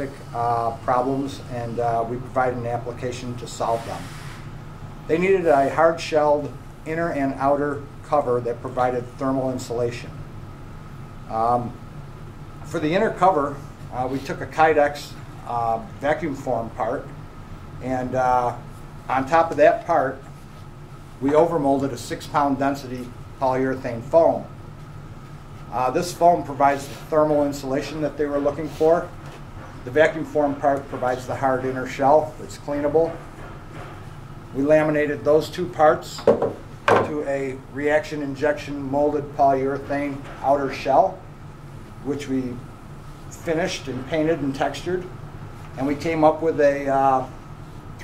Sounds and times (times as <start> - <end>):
Speech: 0.0 - 4.1, 5.1 - 10.2, 11.3 - 11.8, 12.7 - 17.2, 17.8 - 20.3, 21.2 - 24.6, 25.7 - 29.2, 29.8 - 33.2, 34.5 - 41.3, 42.0 - 42.7, 43.3 - 45.2, 45.8 - 47.4.